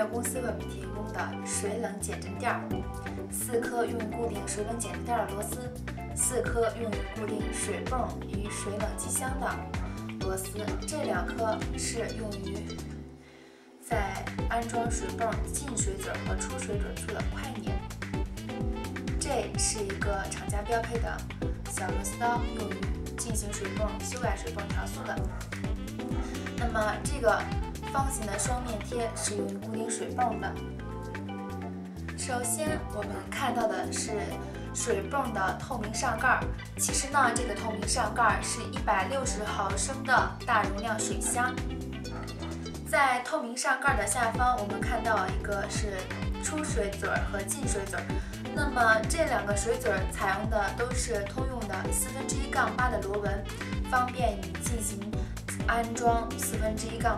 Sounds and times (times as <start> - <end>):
Speech: 0.0 - 12.8, 13.8 - 17.8, 19.1 - 25.3, 26.2 - 30.6, 32.1 - 41.6, 42.9 - 57.1
Music: 0.0 - 57.1.